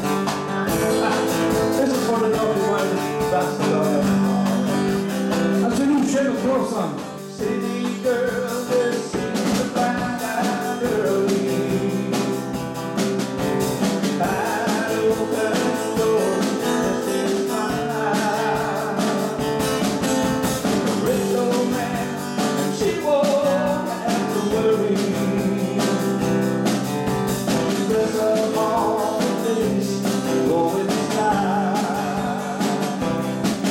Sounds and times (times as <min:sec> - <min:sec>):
Singing: 0:00.0 - 0:06.5, 0:07.2 - 0:12.8, 0:14.1 - 0:19.9, 0:20.9 - 0:26.5, 0:27.5 - 0:33.7
Music: 0:00.0 - 0:33.7.